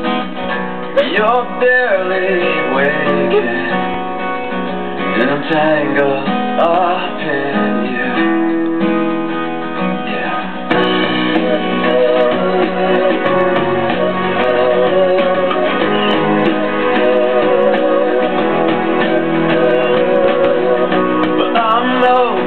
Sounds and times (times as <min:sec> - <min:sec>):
Music: 0:00.0 - 0:22.4.